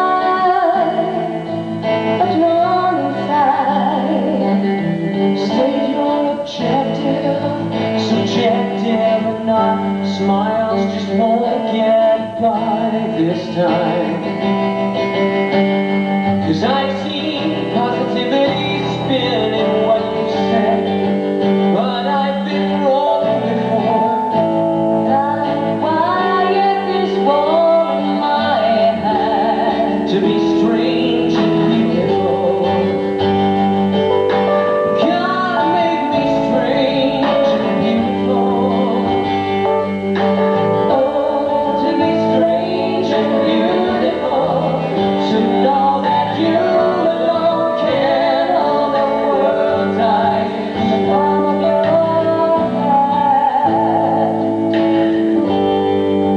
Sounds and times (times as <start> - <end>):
Music: 0.0 - 56.3.